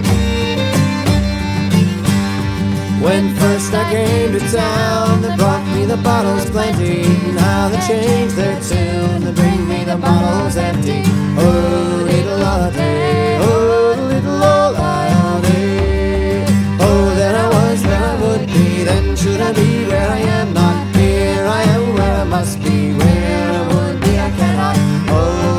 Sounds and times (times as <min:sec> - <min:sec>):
Country: 0:00.0 - 0:25.5.